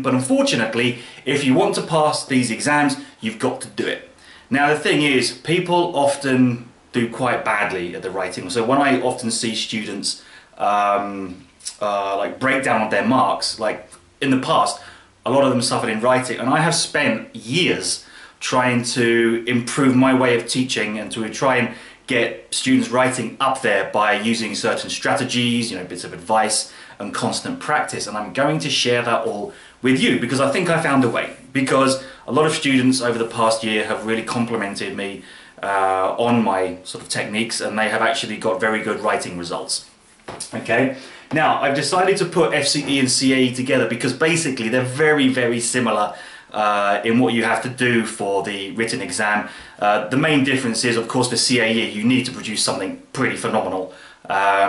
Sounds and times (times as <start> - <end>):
Speech: 0.0 - 54.6.